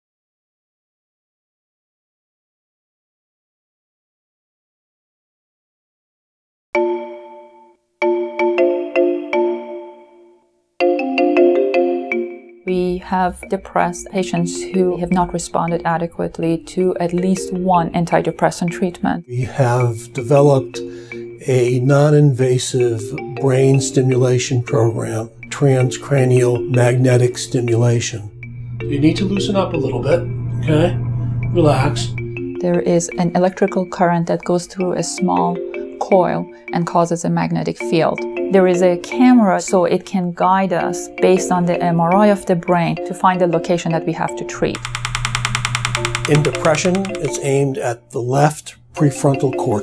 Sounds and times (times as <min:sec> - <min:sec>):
Music: 0:06.8 - 0:49.8.